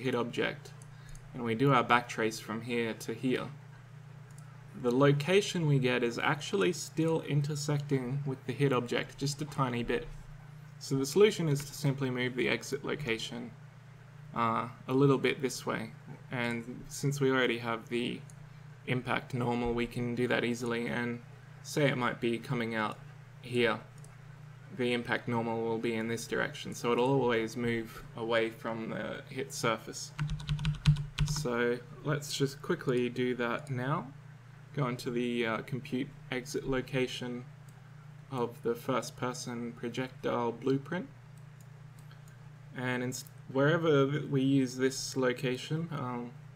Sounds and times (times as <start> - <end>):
Speech: 0.0 - 3.6, 4.7 - 10.2, 10.8 - 13.6, 14.3 - 18.3, 18.9 - 23.9, 24.7 - 30.2, 31.2 - 37.5, 38.3 - 41.2, 42.8 - 46.4.